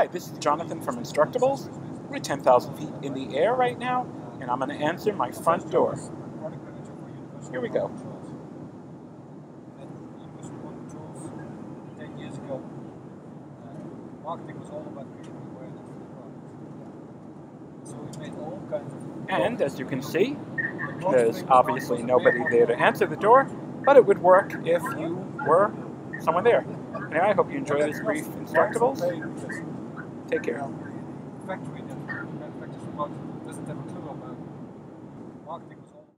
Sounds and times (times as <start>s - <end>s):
Speech: 0.0s - 8.3s, 9.8s - 12.6s, 13.6s - 16.8s, 17.9s - 29.6s, 30.3s - 34.4s, 35.5s - 36.2s.